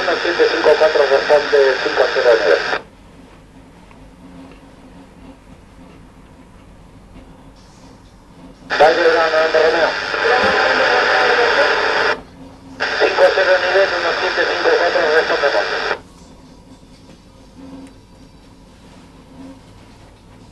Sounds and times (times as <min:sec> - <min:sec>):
Speech: 0:00.0 - 0:02.8, 0:08.7 - 0:12.2, 0:12.8 - 0:16.0
Radio: 0:00.0 - 0:02.9, 0:08.7 - 0:12.2, 0:12.8 - 0:16.0.